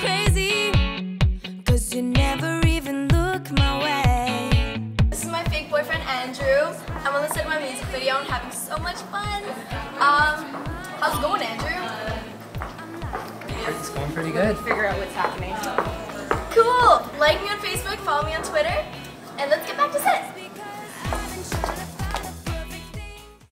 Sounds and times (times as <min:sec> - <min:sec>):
Music: 0:00.0 - 0:23.5.